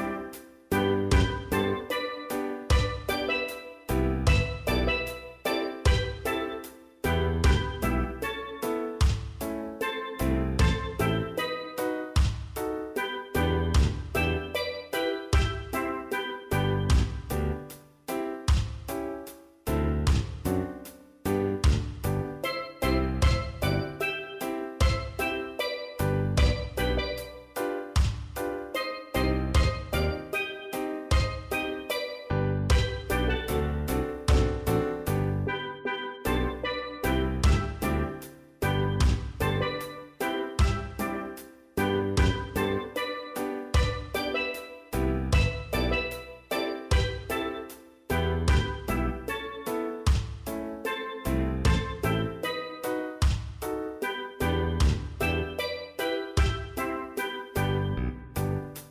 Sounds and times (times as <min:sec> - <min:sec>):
Music: 0:00.0 - 0:58.9.